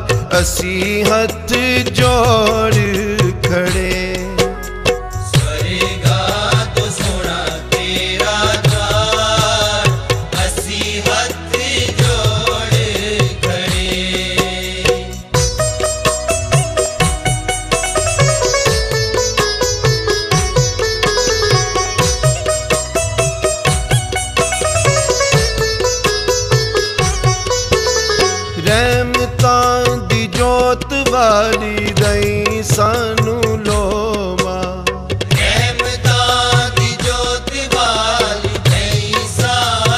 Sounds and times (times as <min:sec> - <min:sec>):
Sitar: 0:00.0 - 0:34.1.